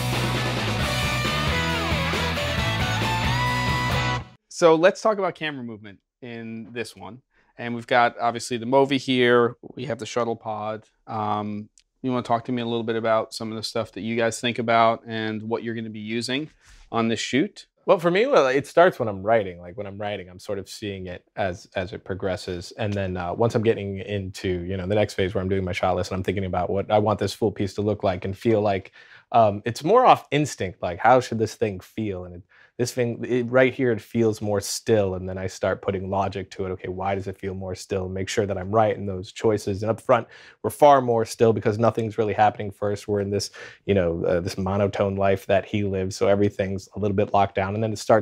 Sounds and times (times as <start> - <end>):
Speech: 4.5 - 48.2.